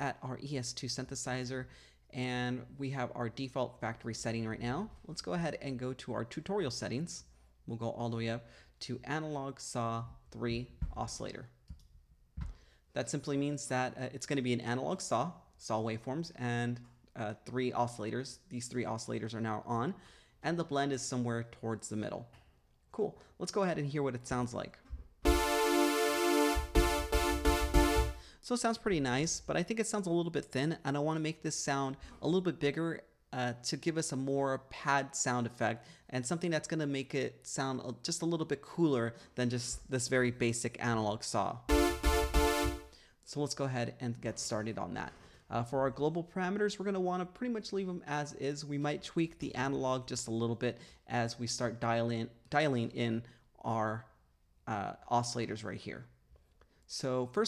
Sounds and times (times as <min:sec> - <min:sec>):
Speech: 0:00.0 - 0:11.6, 0:13.0 - 0:24.9, 0:28.4 - 0:41.7, 0:43.2 - 0:56.2, 0:56.9 - 0:57.4.